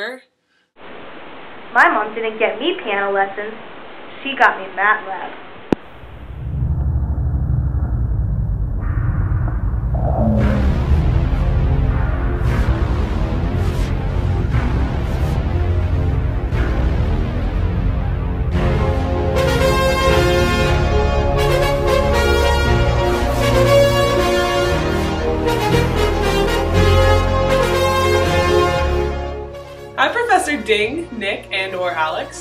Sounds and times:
Soundtrack music: 10.0s - 24.7s.

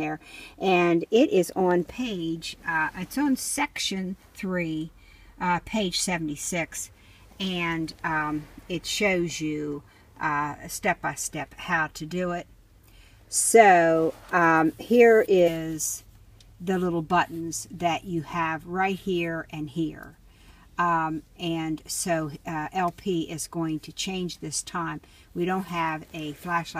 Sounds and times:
Speech: 0.0s - 12.5s, 13.3s - 20.2s, 20.8s - 26.7s.

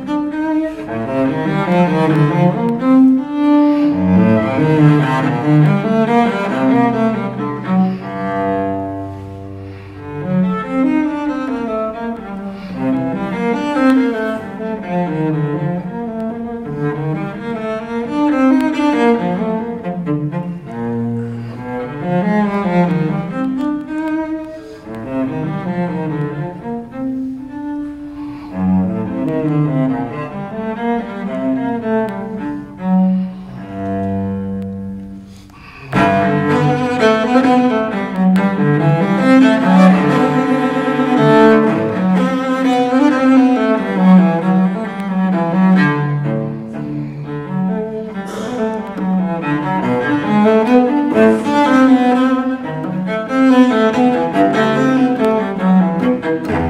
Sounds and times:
Cello: 0.0s - 56.6s.

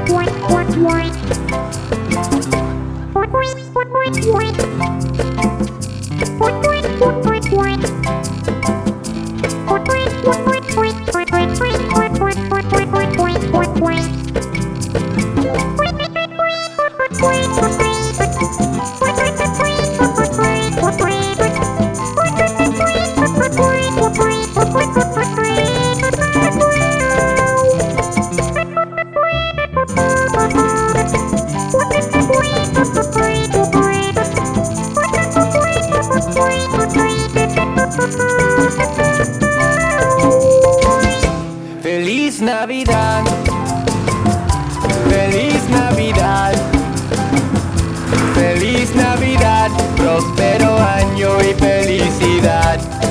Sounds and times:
Christmas music: 0.0s - 9.0s, 9.6s - 41.6s, 42.9s - 53.1s.

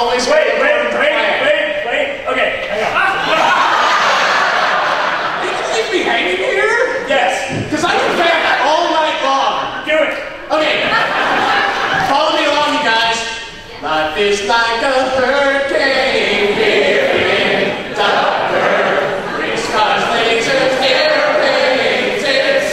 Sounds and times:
Speech: 0.0s - 3.5s, 5.4s - 11.0s, 12.0s - 14.9s.

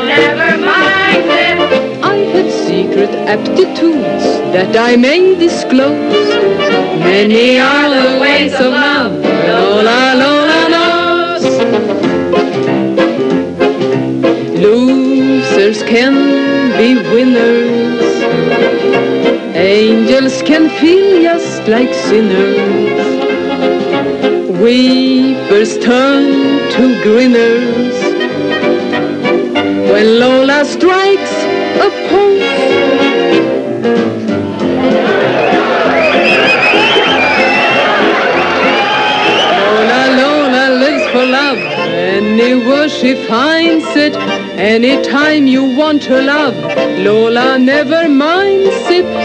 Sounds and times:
Music: 0.0s - 49.2s.

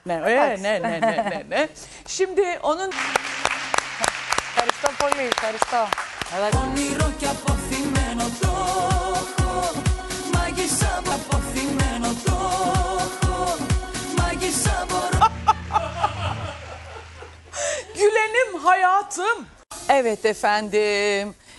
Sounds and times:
Music: 2.9s - 16.6s.

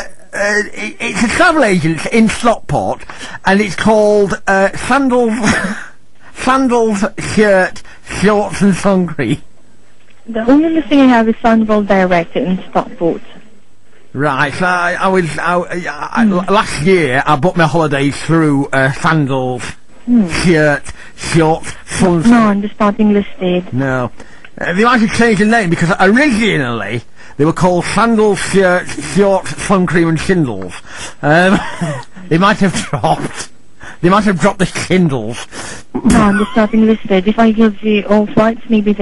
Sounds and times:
Male speech, man speaking: 0.0s - 9.4s, 14.2s - 22.6s, 23.7s - 36.7s
Narration, monologue: 0.0s - 39.0s.

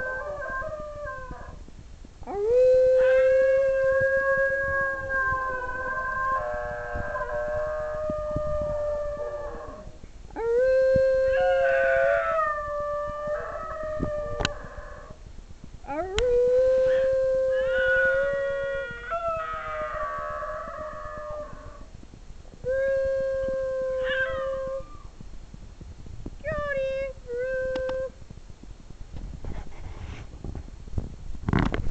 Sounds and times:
Howl: 0.0s - 1.6s, 2.3s - 15.2s, 15.9s - 21.9s, 22.6s - 25.2s
Whimper (dog): 24.0s - 25.1s.

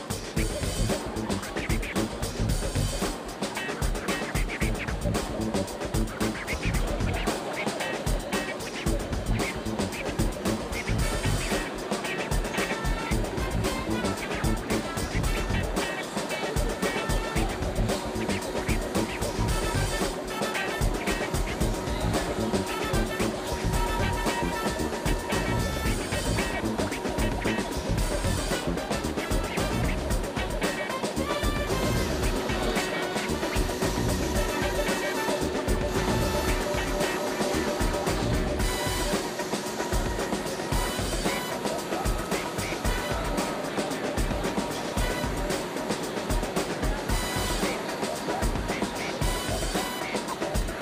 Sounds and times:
Music: 0.0s - 50.8s.

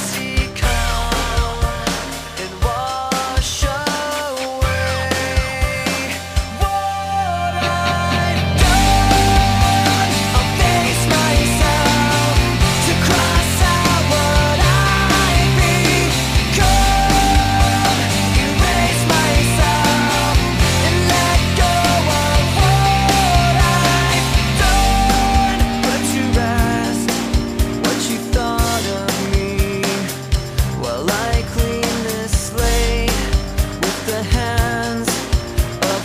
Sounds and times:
Grunge: 0.0s - 36.0s.

